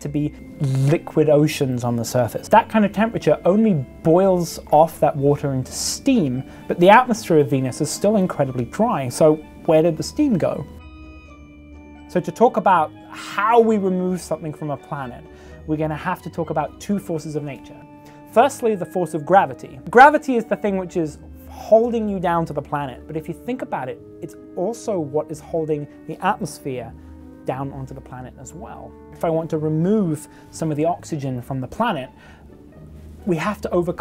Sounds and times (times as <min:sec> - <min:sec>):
Speech: 0:00.0 - 0:10.7, 0:12.1 - 0:32.1, 0:33.2 - 0:34.0
Music: 0:00.0 - 0:34.0.